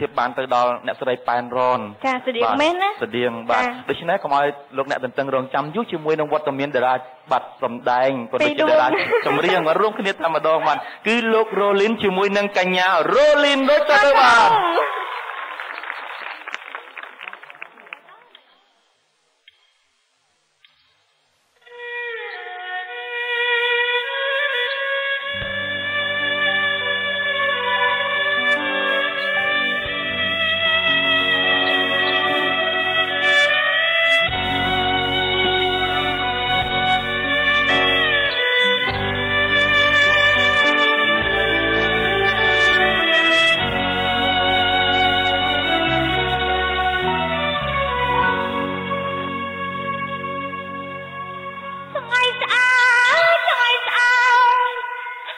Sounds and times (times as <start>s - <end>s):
Sad music: 8.4s - 15.1s, 21.7s - 52.5s.